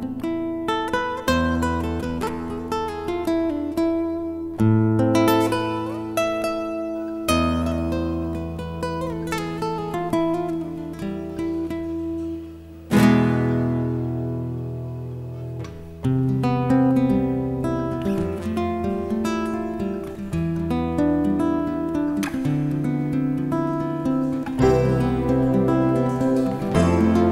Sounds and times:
Acoustic guitar: 0.0 - 27.3.

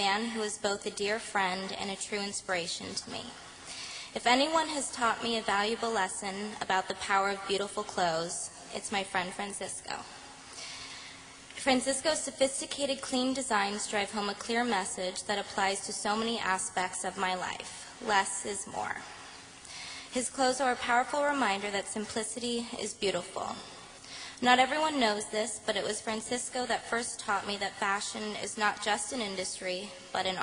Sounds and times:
Female speech, woman speaking: 0.0 - 3.4, 4.2 - 10.1, 11.6 - 19.1, 20.2 - 23.7, 24.4 - 30.4
Narration, monologue: 0.0 - 30.4.

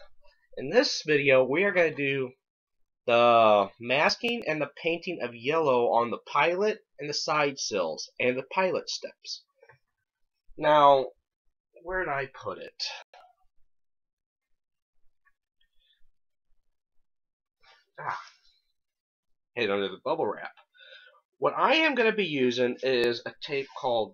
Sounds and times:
Speech: 0.6 - 2.4, 3.1 - 9.5, 10.6 - 11.2, 11.8 - 13.2, 19.6 - 20.6, 21.4 - 24.1.

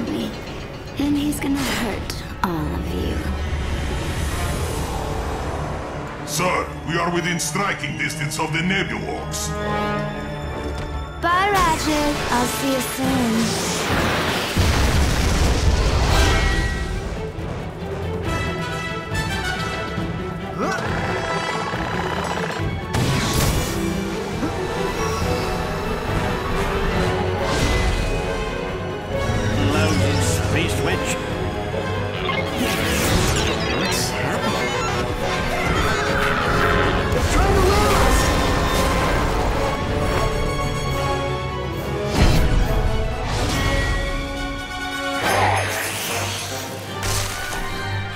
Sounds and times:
Music: 0.0 - 48.1.

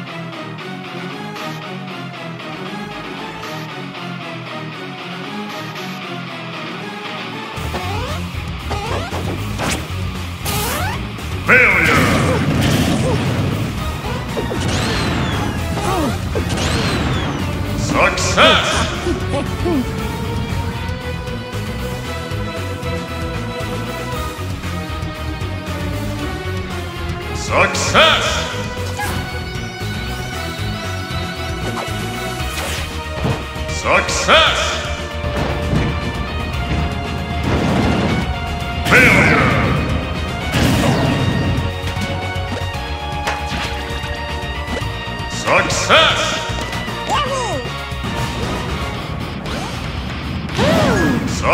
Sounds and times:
Music: 0.0 - 51.5.

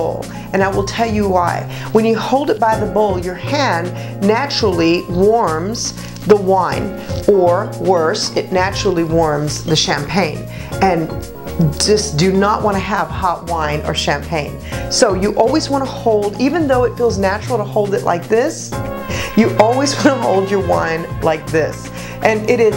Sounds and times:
Speech: 0.0 - 18.7, 19.4 - 22.7
Music: 0.0 - 22.7.

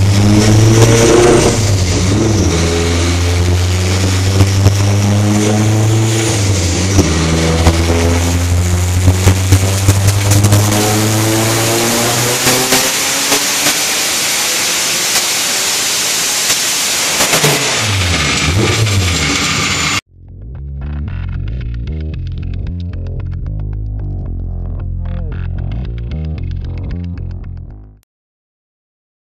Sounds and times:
Car: 0.0 - 20.0
Music: 20.1 - 28.0.

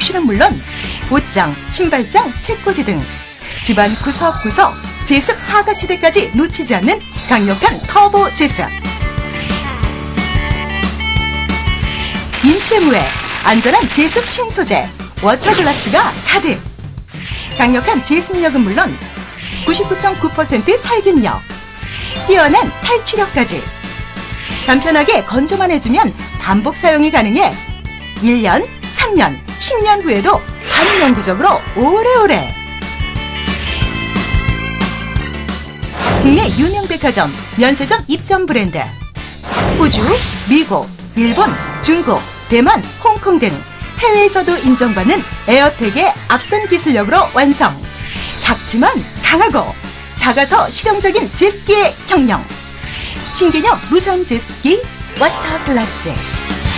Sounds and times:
Speech: 0.0 - 8.7, 12.4 - 16.6, 17.6 - 19.0, 19.7 - 21.4, 22.2 - 23.7, 24.7 - 27.6, 28.2 - 32.6, 36.2 - 39.0, 39.7 - 56.3
Music: 0.0 - 56.7.

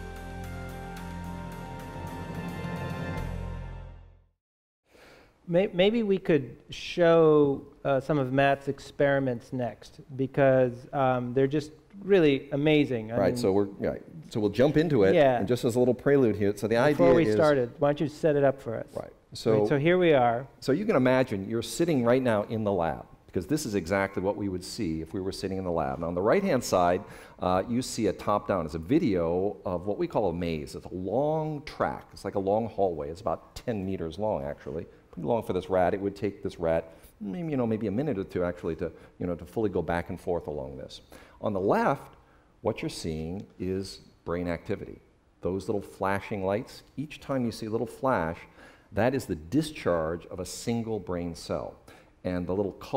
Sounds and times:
Speech: 5.5 - 52.9.

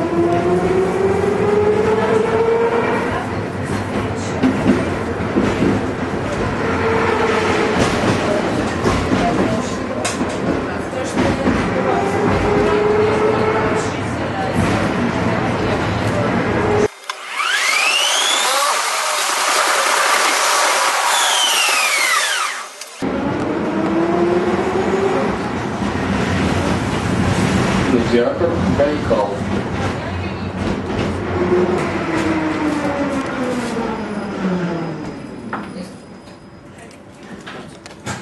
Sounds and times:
Outside, urban or manmade: 0.0 - 38.2
Vehicle: 0.0 - 38.2
Speech: 8.2 - 16.9, 27.9 - 30.8.

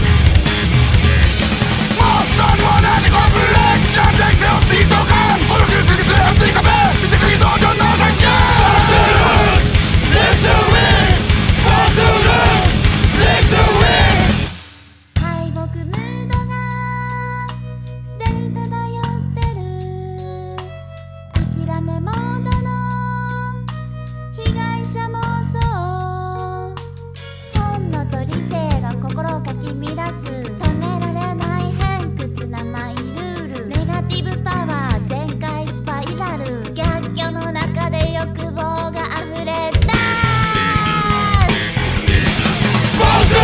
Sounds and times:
Music: 0.0 - 43.4.

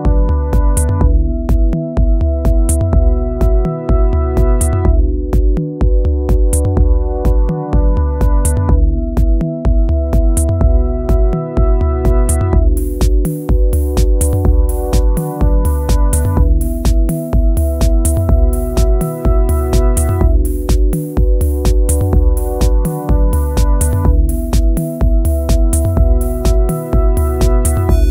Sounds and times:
Techno: 0.0 - 28.1
Drum: 0.1 - 28.1.

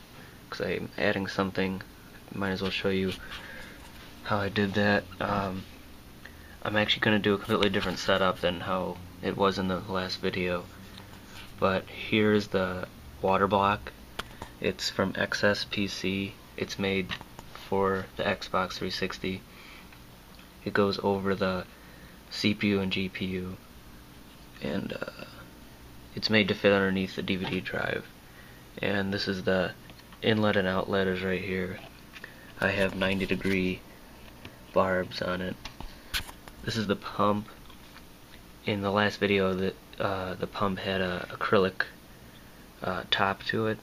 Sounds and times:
Speech: 0.5 - 3.2, 4.2 - 5.7, 6.6 - 10.7, 11.6 - 14.0, 14.6 - 19.4, 20.6 - 21.7, 22.3 - 23.6, 24.6 - 25.4, 26.1 - 28.1, 28.8 - 31.9, 32.6 - 33.8, 34.7 - 35.6, 36.6 - 37.6, 38.6 - 42.0, 42.8 - 43.8.

